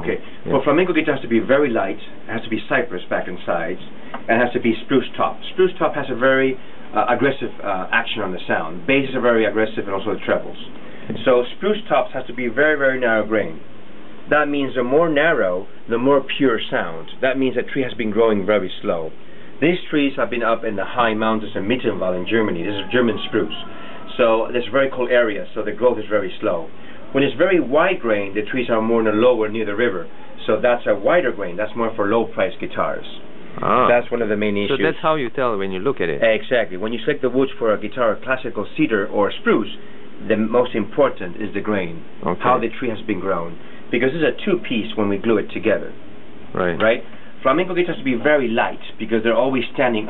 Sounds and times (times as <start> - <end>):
Speech: 0.0 - 13.6, 14.3 - 50.1.